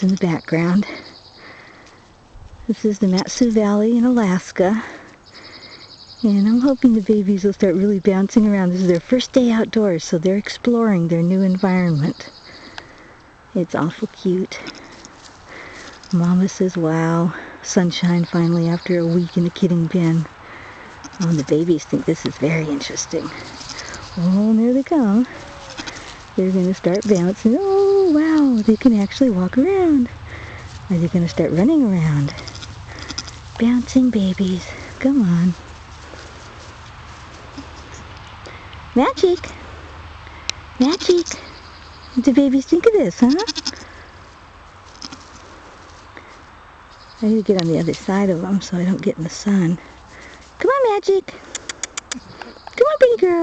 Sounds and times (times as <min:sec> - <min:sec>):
Speech: 0:02.7 - 0:04.8, 0:06.2 - 0:12.2, 0:21.2 - 0:23.3, 0:24.2 - 0:25.3, 0:26.4 - 0:30.1, 0:30.9 - 0:32.3, 0:33.6 - 0:35.6, 0:39.0 - 0:39.6, 0:42.2 - 0:43.5, 0:47.2 - 0:49.8, 0:50.6 - 0:51.3, 0:52.8 - 0:53.4.